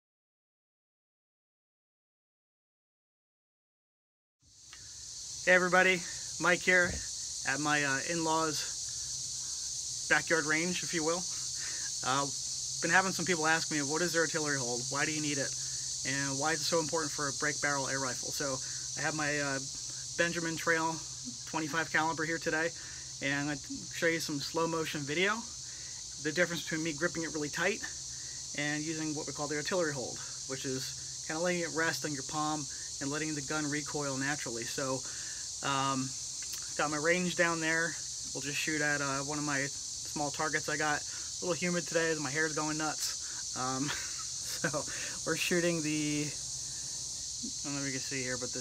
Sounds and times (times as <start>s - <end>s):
Outside, rural or natural: 4.4s - 48.6s
Speech: 5.5s - 8.7s, 10.1s - 11.3s, 12.0s - 15.5s, 16.1s - 25.5s, 26.2s - 27.9s, 28.6s - 35.0s, 35.6s - 36.1s, 36.8s - 43.9s, 44.5s - 46.4s, 47.5s - 48.6s.